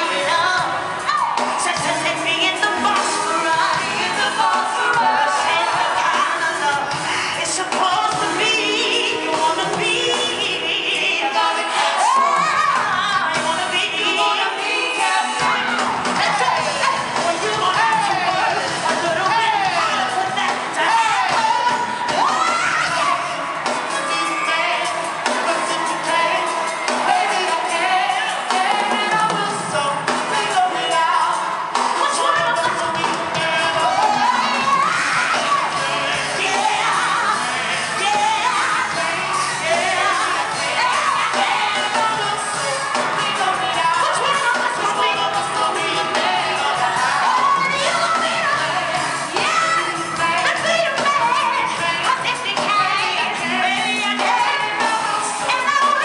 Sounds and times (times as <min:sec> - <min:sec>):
Inside, large room or hall: 0:00.0 - 0:56.0
Music: 0:00.0 - 0:56.0
Singing: 0:00.0 - 0:56.0.